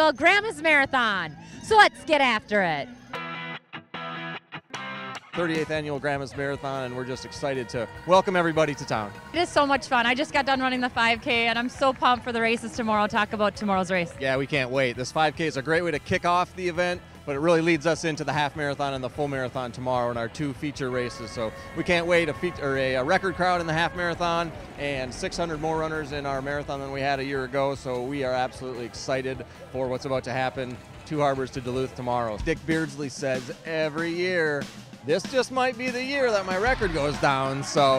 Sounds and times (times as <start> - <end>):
Music: 0.0 - 37.9
Outside, urban or manmade: 0.0 - 37.9
Speech: 5.4 - 37.9.